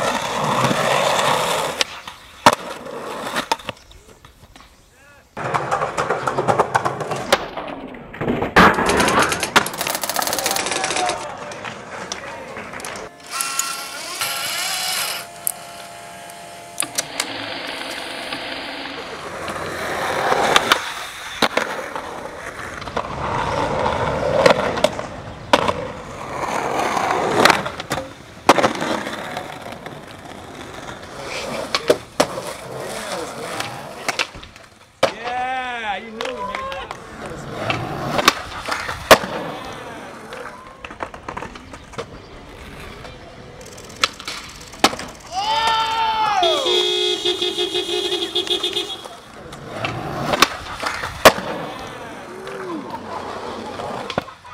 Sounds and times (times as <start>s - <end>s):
Outside, urban or manmade: 0.0s - 54.5s.